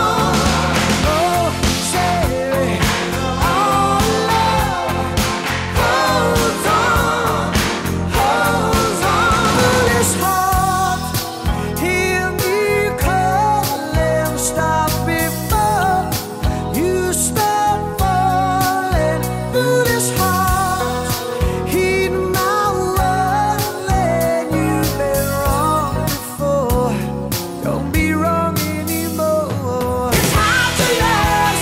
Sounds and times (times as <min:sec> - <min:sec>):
Music: 0:00.0 - 0:31.6.